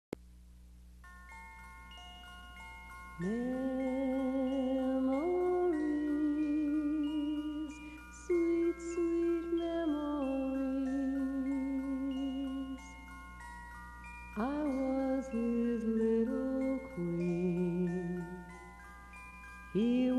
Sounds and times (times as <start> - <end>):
Music: 1.0 - 20.1.